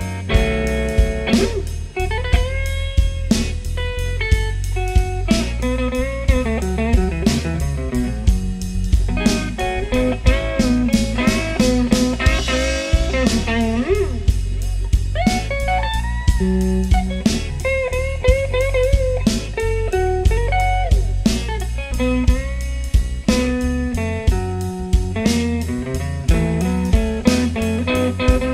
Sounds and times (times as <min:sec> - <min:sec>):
Blues: 0:00.0 - 0:28.5
Electric guitar: 0:00.0 - 0:28.5.